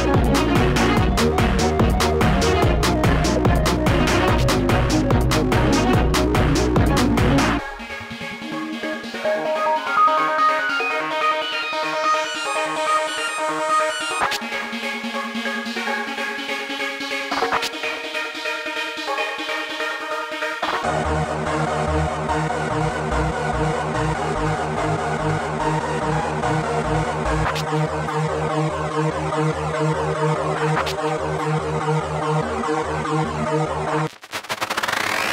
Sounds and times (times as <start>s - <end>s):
Techno: 0.0s - 35.3s.